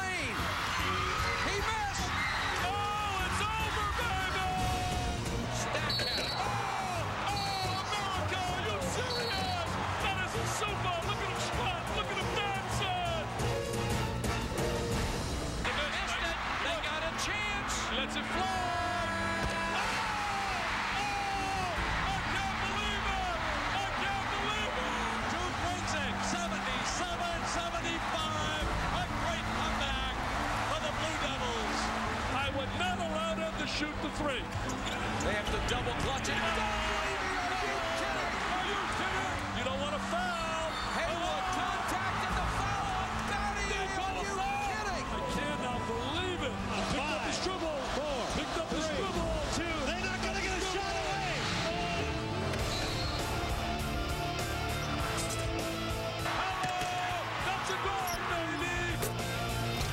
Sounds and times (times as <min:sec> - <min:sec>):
Music: 0:00.0 - 0:59.9.